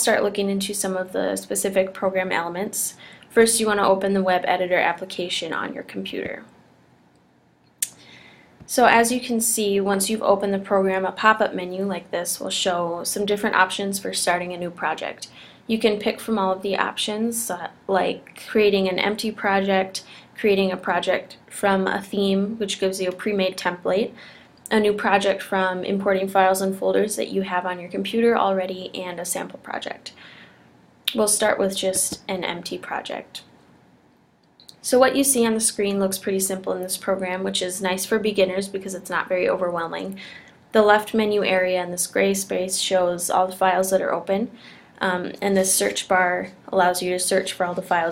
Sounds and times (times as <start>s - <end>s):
Speech: 0.0s - 6.6s, 8.7s - 30.2s, 31.1s - 33.5s, 34.6s - 48.1s.